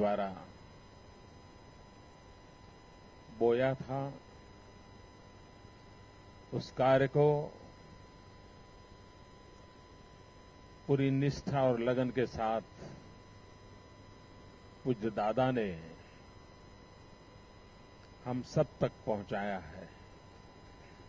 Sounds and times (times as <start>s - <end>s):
Male speech, man speaking: 0.0s - 0.5s, 3.3s - 4.2s, 6.6s - 7.6s, 10.9s - 13.0s, 14.9s - 16.0s, 18.2s - 20.0s
Narration, monologue: 0.0s - 21.0s.